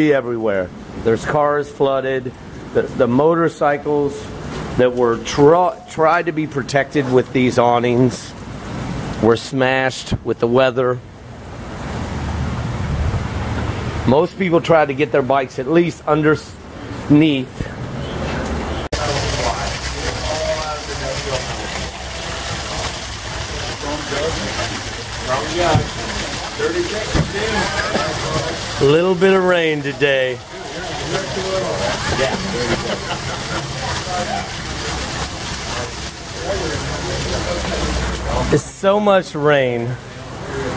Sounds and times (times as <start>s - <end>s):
Speech: 0.0s - 8.4s, 9.2s - 11.0s, 14.1s - 17.8s, 19.0s - 22.0s, 23.4s - 35.1s, 35.7s - 40.7s.